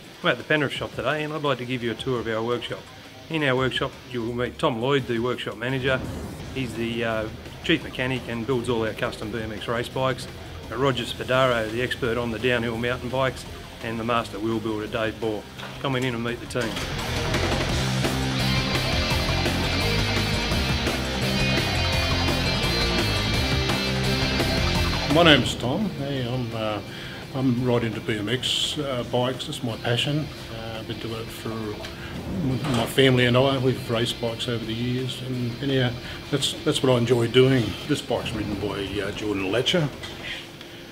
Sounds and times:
Music: 0.0s - 40.9s
Speech: 0.2s - 16.9s, 25.1s - 40.5s.

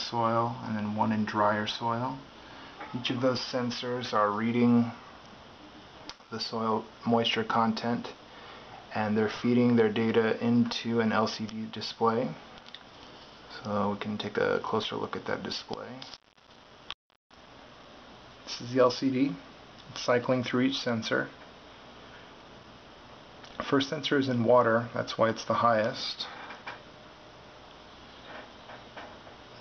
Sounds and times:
Speech: 0.0s - 5.0s, 6.3s - 8.2s, 8.9s - 12.4s, 13.5s - 16.1s, 18.5s - 21.4s, 23.6s - 26.4s.

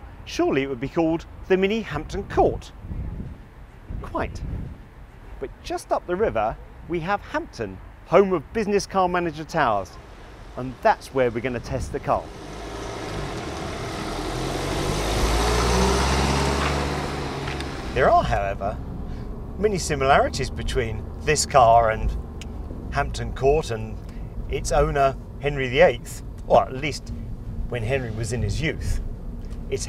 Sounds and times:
Speech: 0.3s - 2.8s, 4.0s - 4.4s, 5.4s - 10.0s, 10.6s - 12.3s, 18.0s - 18.8s, 19.6s - 22.2s, 23.0s - 27.0s, 27.7s - 29.0s
Car passing by: 9.9s - 19.5s.

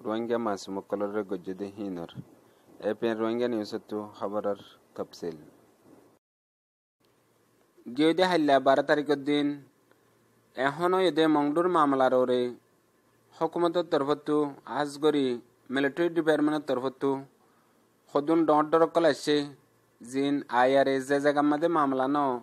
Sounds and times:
Speech: 0.0s - 5.5s, 7.8s - 9.7s, 10.6s - 12.6s, 13.3s - 17.3s, 18.1s - 22.4s.

